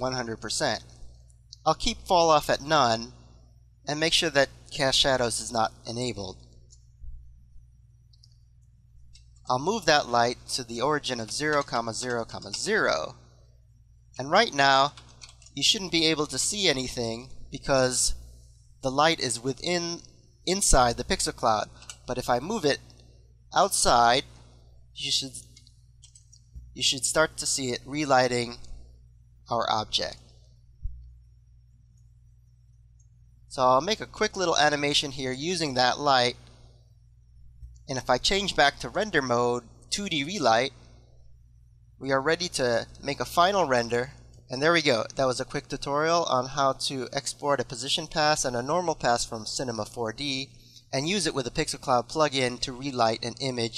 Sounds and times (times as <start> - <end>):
Speech: 0.0 - 0.9, 1.6 - 3.1, 3.9 - 6.4, 9.5 - 13.2, 14.2 - 15.0, 15.6 - 18.2, 18.8 - 22.8, 23.6 - 24.3, 25.0 - 25.5, 26.8 - 28.6, 29.5 - 30.2, 33.5 - 36.4, 37.9 - 40.8, 42.0 - 53.7.